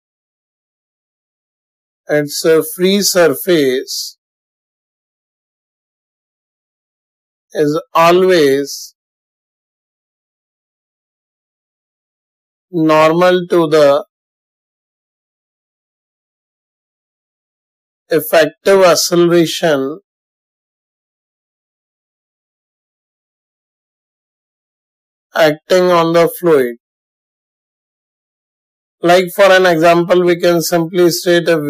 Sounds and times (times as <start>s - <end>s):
Speech: 2.1s - 4.2s, 7.6s - 9.0s, 12.8s - 14.1s, 18.1s - 20.1s, 25.4s - 26.8s, 29.0s - 31.7s.